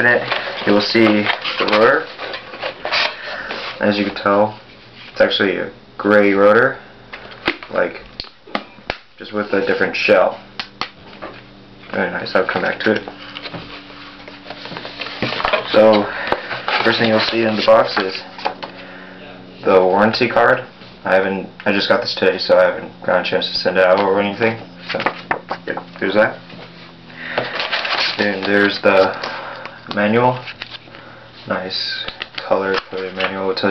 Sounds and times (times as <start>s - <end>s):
Speech: 0.0s - 2.1s, 3.8s - 4.6s, 5.2s - 6.8s, 7.7s - 8.1s, 9.2s - 10.4s, 11.9s - 13.1s, 15.6s - 16.1s, 16.8s - 18.2s, 19.2s - 26.4s, 28.2s - 29.2s, 29.9s - 30.4s, 31.5s - 33.7s.